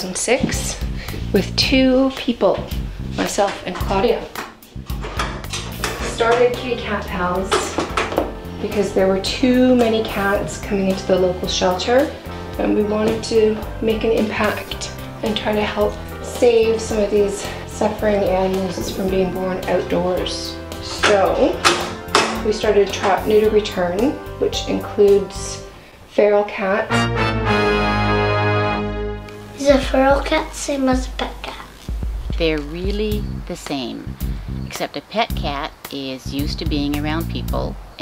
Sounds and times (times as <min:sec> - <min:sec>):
Speech: 0:00.0 - 0:04.3, 0:06.0 - 0:07.8, 0:08.6 - 0:21.6, 0:22.4 - 0:26.9, 0:29.6 - 0:31.7, 0:32.3 - 0:34.1, 0:34.7 - 0:38.0
Music: 0:00.0 - 0:38.0.